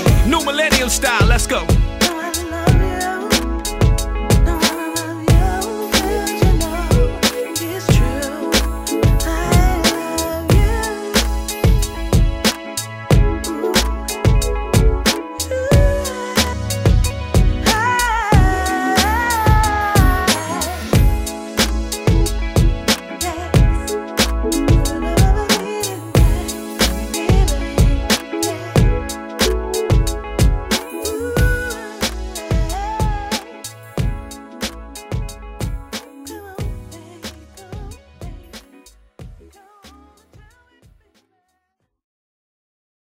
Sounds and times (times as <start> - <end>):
Rhythm and blues: 0.0 - 41.4.